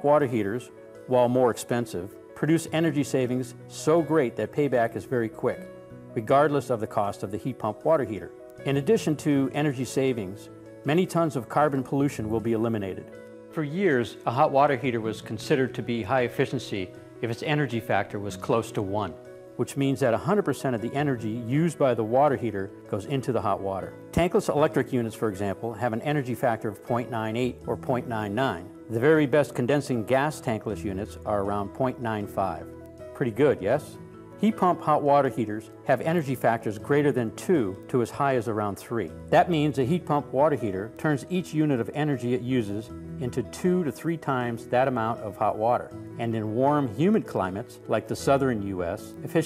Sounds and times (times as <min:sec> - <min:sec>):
Music: 0:00.0 - 0:49.4
Speech: 0:00.0 - 0:49.4.